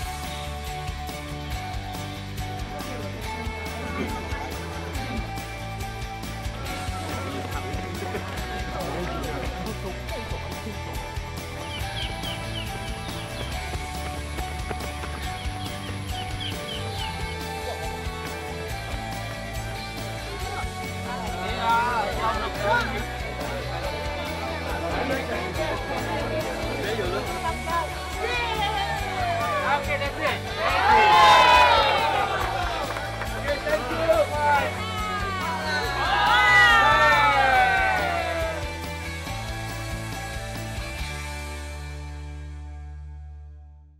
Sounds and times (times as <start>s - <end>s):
Music: 0.0s - 44.0s
Outside, urban or manmade: 0.0s - 44.0s.